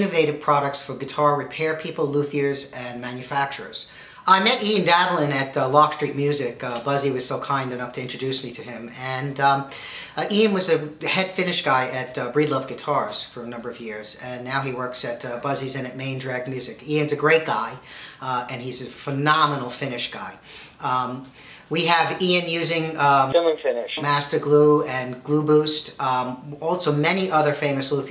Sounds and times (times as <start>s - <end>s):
Speech: 0.0s - 28.1s.